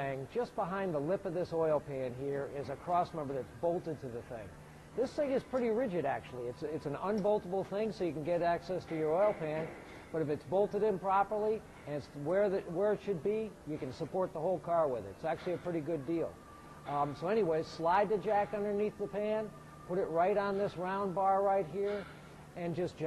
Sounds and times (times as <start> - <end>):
Speech: 0.0 - 23.0.